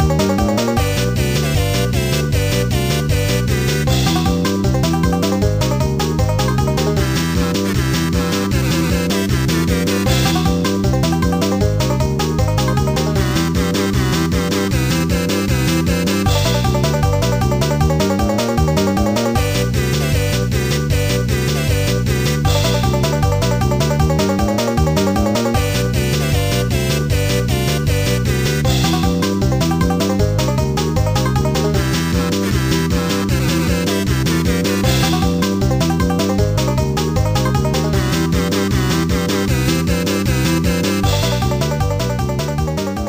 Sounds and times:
Music: 0:00.0 - 0:43.0.

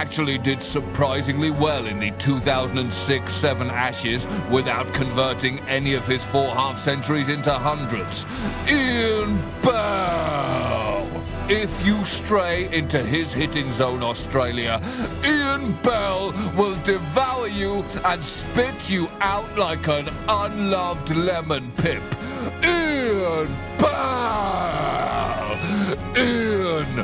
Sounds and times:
Speech: 0:00.0 - 0:25.6, 0:26.2 - 0:27.0
Music: 0:00.0 - 0:27.0.

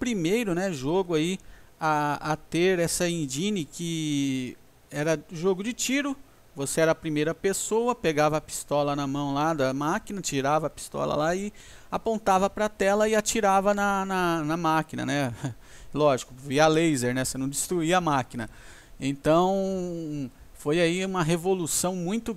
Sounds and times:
Speech: 0:00.0 - 0:22.3.

